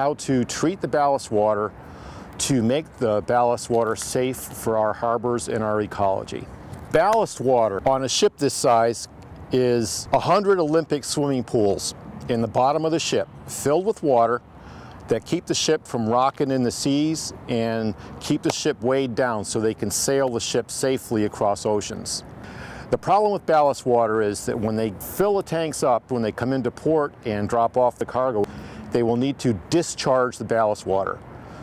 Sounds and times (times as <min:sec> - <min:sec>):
Speech: 0:00.0 - 0:01.7, 0:02.4 - 0:14.4, 0:15.1 - 0:22.2, 0:22.9 - 0:31.2.